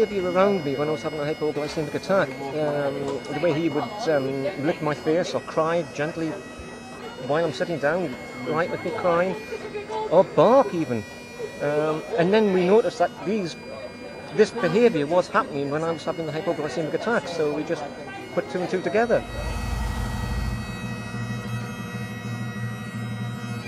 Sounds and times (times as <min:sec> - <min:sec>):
Music: 0:00.0 - 0:23.6.